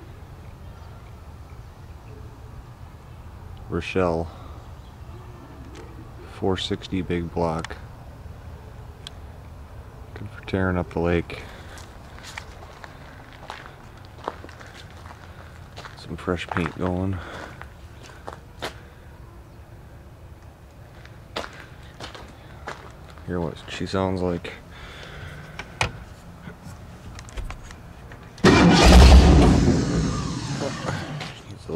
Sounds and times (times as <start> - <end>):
Speech: 3.7 - 4.4, 5.1 - 7.8, 10.2 - 11.5, 16.0 - 17.3, 23.2 - 24.6, 30.6 - 31.7.